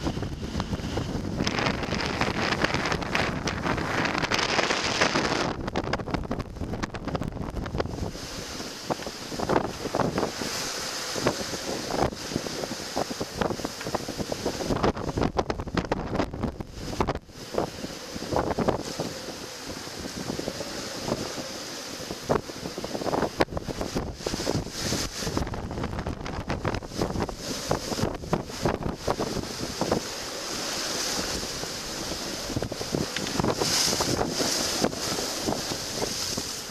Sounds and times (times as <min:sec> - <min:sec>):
Wind noise (microphone): 0:00.0 - 0:36.7.